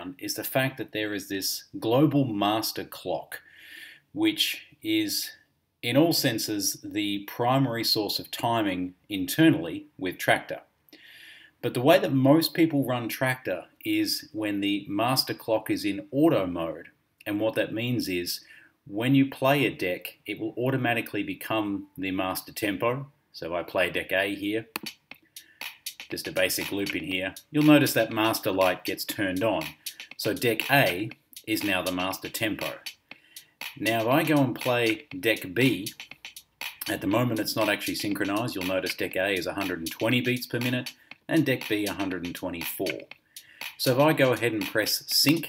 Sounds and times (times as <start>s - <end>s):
Speech: 0.0s - 3.4s, 4.2s - 10.7s, 11.6s - 24.7s, 26.1s - 32.8s, 33.8s - 36.0s, 36.8s - 43.1s, 43.8s - 45.4s.